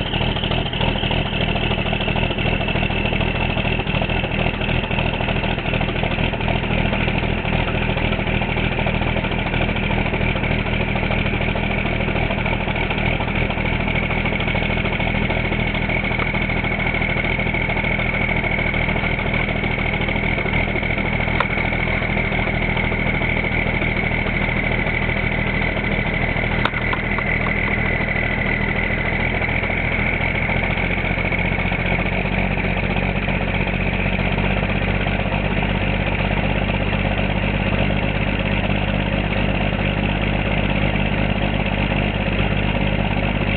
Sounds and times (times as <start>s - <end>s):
Idling: 0.0s - 43.5s
Vehicle: 0.0s - 43.5s.